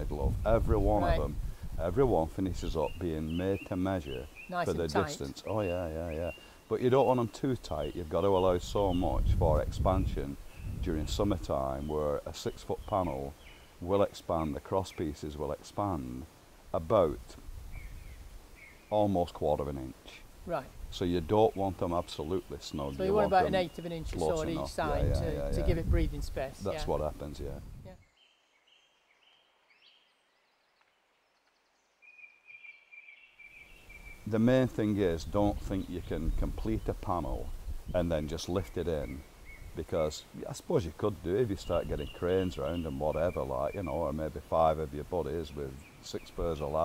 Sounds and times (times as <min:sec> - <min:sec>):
Speech: 0:00.0 - 0:17.4, 0:18.9 - 0:27.6, 0:34.3 - 0:39.2, 0:39.8 - 0:46.8.